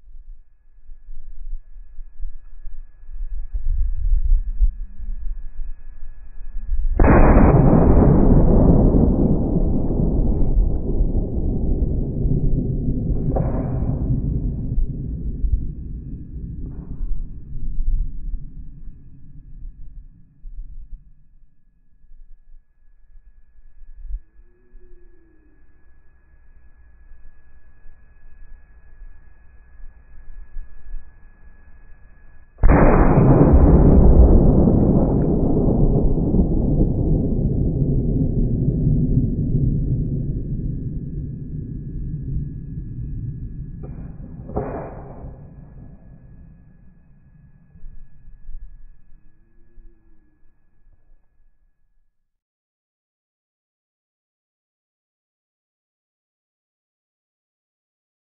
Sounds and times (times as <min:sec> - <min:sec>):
Silence: 0:00.0 - 0:52.3.